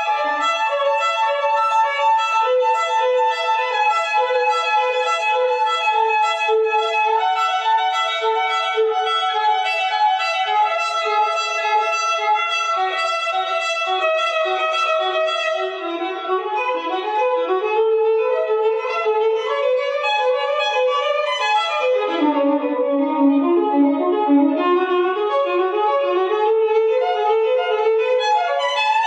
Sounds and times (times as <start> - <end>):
Violin, fiddle: 0.0 - 29.0.